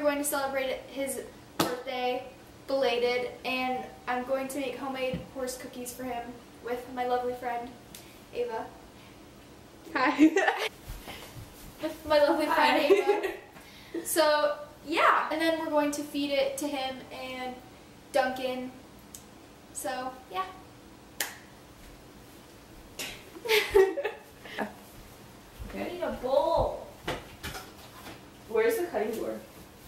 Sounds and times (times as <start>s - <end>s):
Speech: 11.8s - 13.3s, 25.7s - 26.9s, 28.5s - 29.5s.